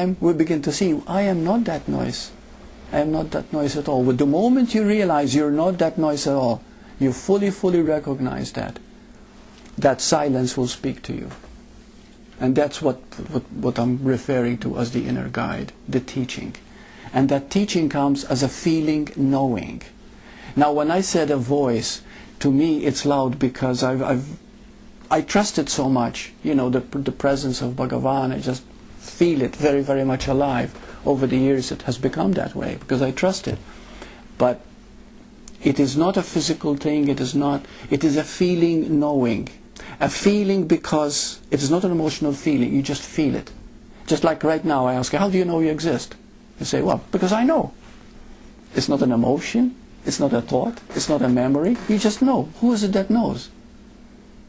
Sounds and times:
Speech: 0.0 - 8.8, 9.8 - 11.5, 12.4 - 24.4, 25.1 - 33.6, 34.4 - 34.7, 35.6 - 47.8, 48.7 - 53.6
Inside, small room: 0.0 - 54.4.

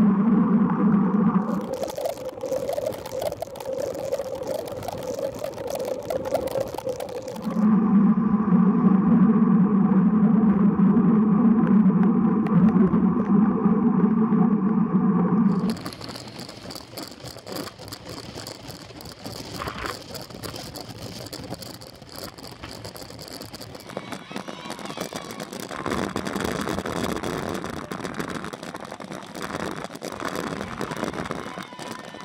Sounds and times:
Bicycle: 0.0 - 7.8, 15.5 - 32.2.

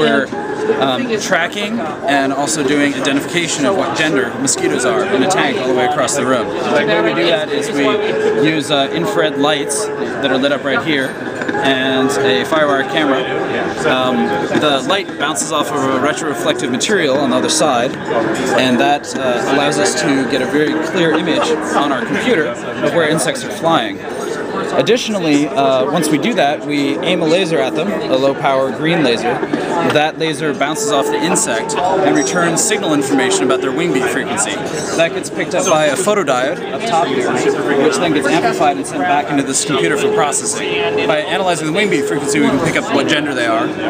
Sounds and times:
Speech: 0.0 - 43.9.

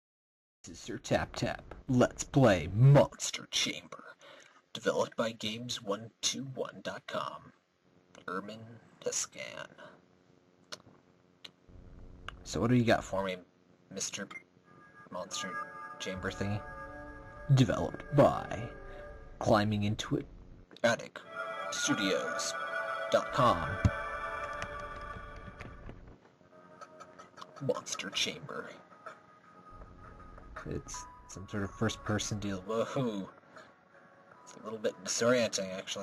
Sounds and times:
Narration, monologue: 0.7 - 24.1, 27.2 - 36.0.

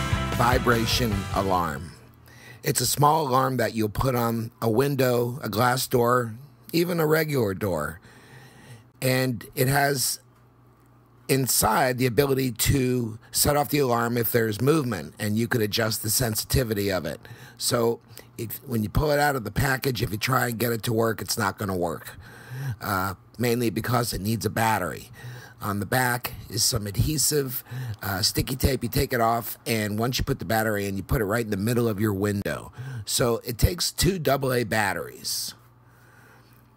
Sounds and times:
Speech: 0.4 - 2.0, 2.6 - 8.0, 9.0 - 10.2, 11.3 - 35.6.

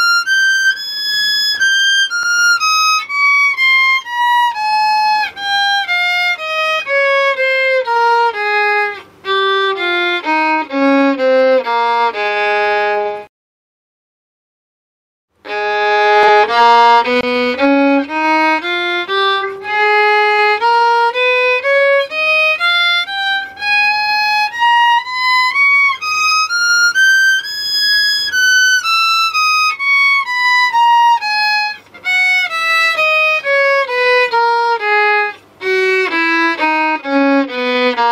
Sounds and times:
Violin, fiddle: 0.0 - 13.3, 15.4 - 38.1.

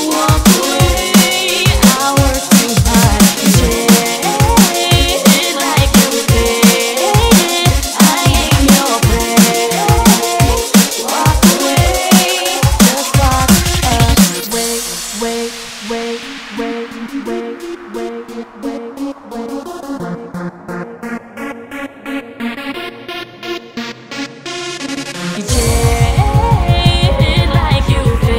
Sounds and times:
Music: 0.0 - 28.3.

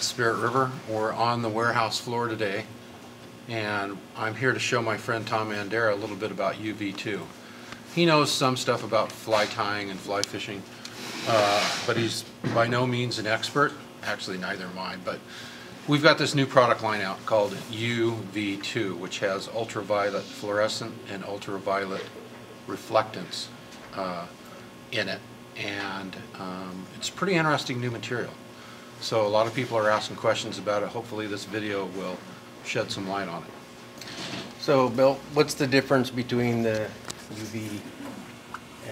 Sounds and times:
Speech: 0.0 - 2.7, 3.5 - 7.3, 7.9 - 15.2, 15.9 - 28.4, 29.0 - 33.6, 34.6 - 38.2.

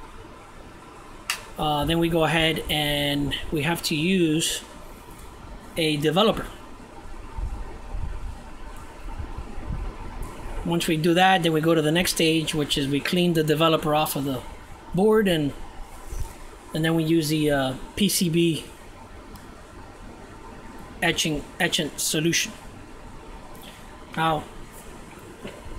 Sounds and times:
Speech: 1.6 - 4.7, 5.8 - 6.6, 10.6 - 15.6, 16.8 - 18.7, 21.0 - 22.6, 24.2 - 24.5.

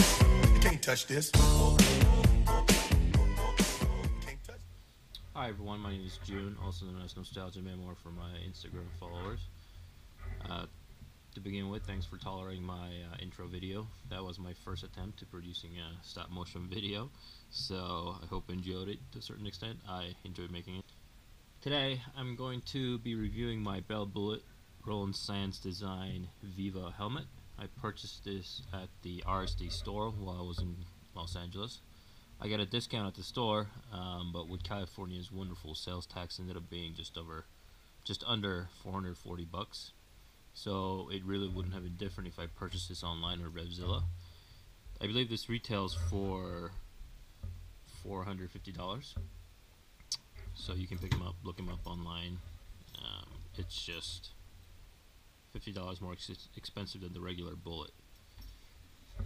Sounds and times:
Speech: 4.2 - 9.5, 10.2 - 20.9, 21.6 - 31.8, 32.4 - 40.0, 40.6 - 44.1, 45.0 - 46.8, 47.9 - 49.2, 50.5 - 54.4, 55.5 - 58.0.

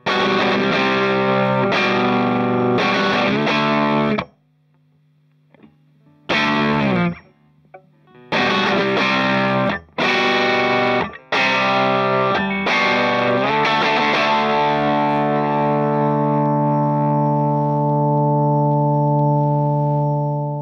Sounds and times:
Distortion: 0.0 - 20.6
Effects unit: 0.0 - 20.6
Guitar: 0.0 - 20.6.

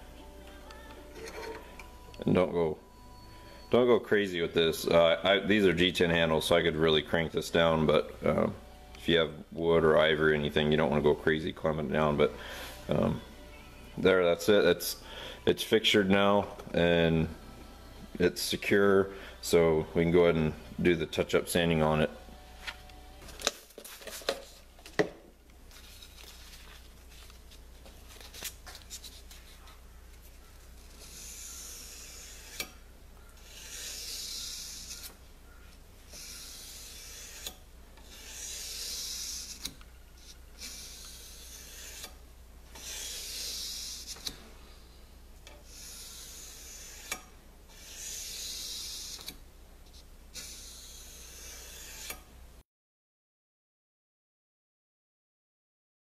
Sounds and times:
Rub: 30.8 - 32.6, 33.4 - 35.2, 36.1 - 42.2, 42.8 - 44.3, 45.6 - 47.1, 47.7 - 49.3, 50.0 - 52.2
Filing (rasp): 30.8 - 32.8, 33.4 - 35.2, 36.1 - 42.2, 42.8 - 44.4, 45.6 - 49.4, 50.4 - 52.3.

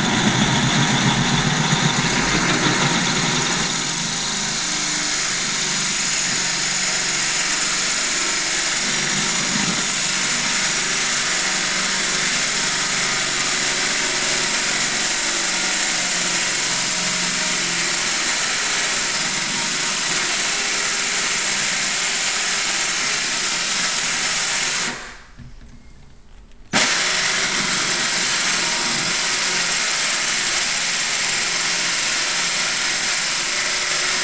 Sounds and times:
Rattle: 0.0 - 4.7
Vibration: 0.0 - 14.8.

